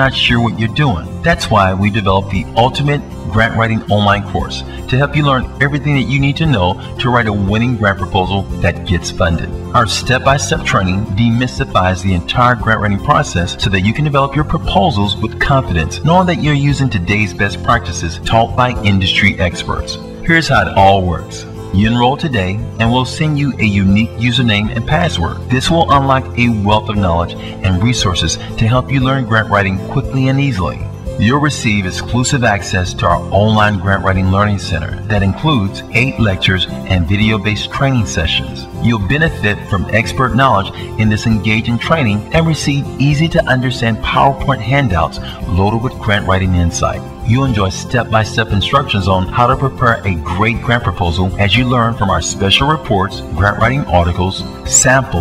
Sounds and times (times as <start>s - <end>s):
Music: 0.0s - 55.2s
Speech: 0.0s - 55.2s.